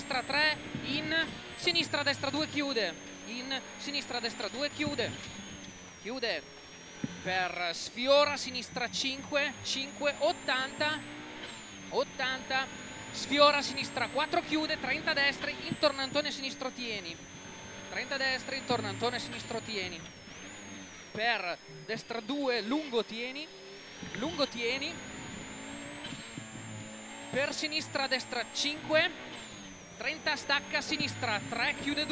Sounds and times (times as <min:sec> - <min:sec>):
Speech: 0:00.0 - 0:05.2, 0:06.1 - 0:06.4, 0:07.3 - 0:11.0, 0:11.9 - 0:17.2, 0:17.9 - 0:20.0, 0:21.2 - 0:23.5, 0:24.2 - 0:25.0, 0:27.4 - 0:29.2, 0:30.0 - 0:32.1
Car: 0:00.0 - 0:32.1.